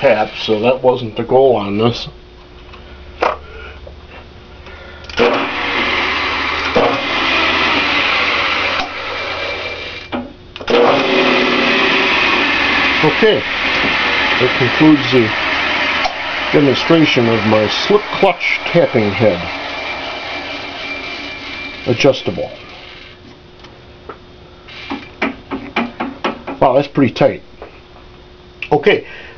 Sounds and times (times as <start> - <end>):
Speech: 0.0 - 2.2, 13.0 - 13.4, 14.4 - 15.4, 16.5 - 19.5, 21.9 - 22.6, 26.6 - 27.4, 28.6 - 29.1
Drill: 5.1 - 23.2, 24.7 - 25.1.